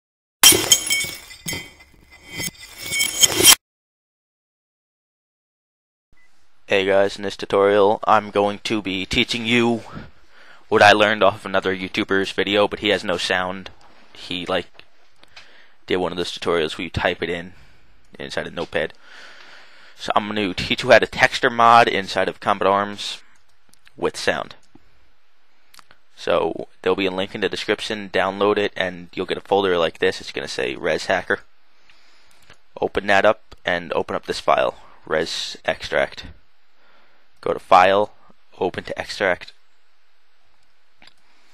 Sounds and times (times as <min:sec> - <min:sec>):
Breaking: 0:00.4 - 0:03.6
Speech: 0:06.7 - 0:10.1, 0:10.7 - 0:14.7, 0:15.9 - 0:17.6, 0:18.2 - 0:19.0, 0:20.0 - 0:23.2, 0:23.9 - 0:24.6, 0:26.2 - 0:31.5, 0:32.8 - 0:36.4, 0:37.4 - 0:39.6.